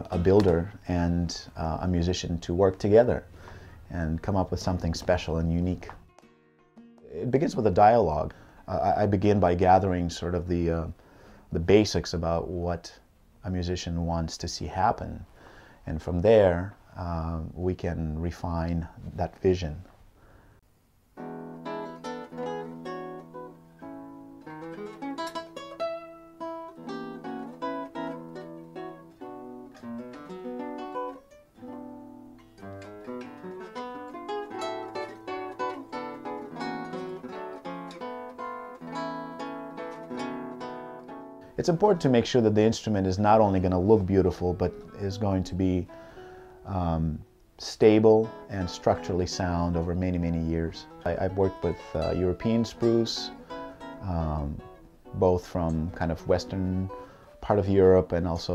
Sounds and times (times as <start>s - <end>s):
Ukulele: 0.0s - 0.8s, 21.2s - 42.4s, 48.1s - 58.5s
Acoustic guitar: 0.0s - 13.0s, 21.1s - 58.5s.